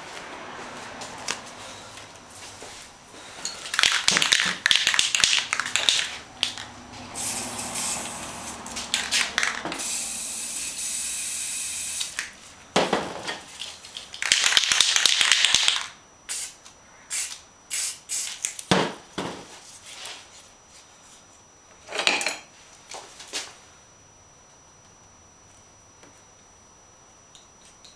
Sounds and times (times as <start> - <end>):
Spray: 7.2 - 8.6, 9.8 - 12.2, 16.3 - 18.4.